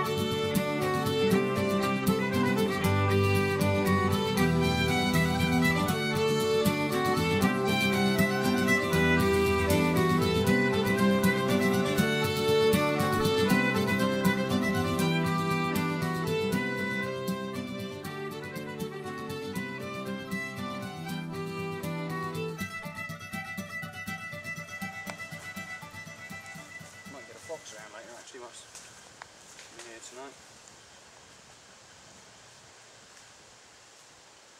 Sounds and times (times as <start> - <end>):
Music: 0.0 - 28.2.